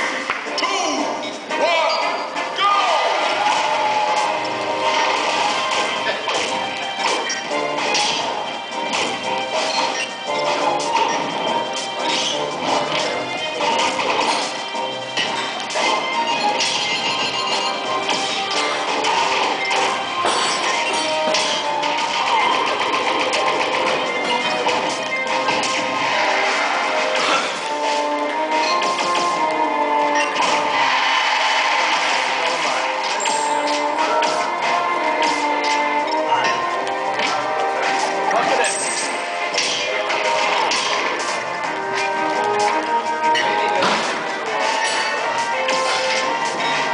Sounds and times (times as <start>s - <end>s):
Music: 0.0s - 46.9s
Smash, crash: 3.0s - 14.6s, 37.2s - 41.5s.